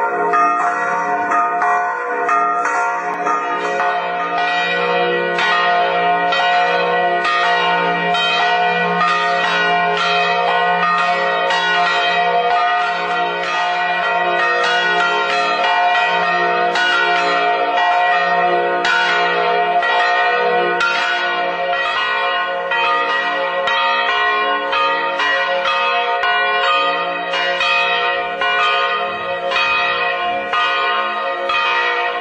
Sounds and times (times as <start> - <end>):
Change ringing (campanology): 0.0 - 32.2.